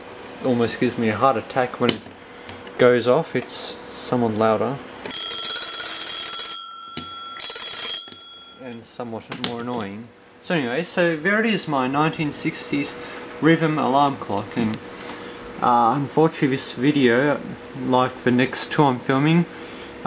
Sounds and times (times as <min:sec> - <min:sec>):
Speech: 0:00.4 - 0:02.0, 0:02.8 - 0:04.8, 0:08.6 - 0:14.8, 0:15.6 - 0:19.5
Alarm clock: 0:05.1 - 0:08.8.